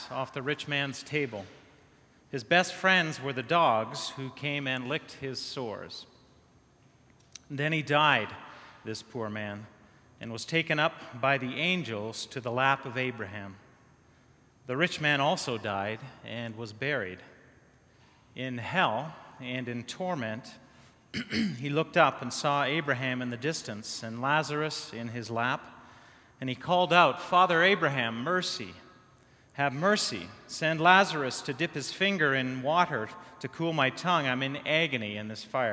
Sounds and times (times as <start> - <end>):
Speech: 0.0 - 1.5, 2.3 - 6.1, 7.4 - 13.6, 14.7 - 17.3, 18.4 - 20.6, 21.4 - 25.7, 26.4 - 28.8, 29.6 - 35.7.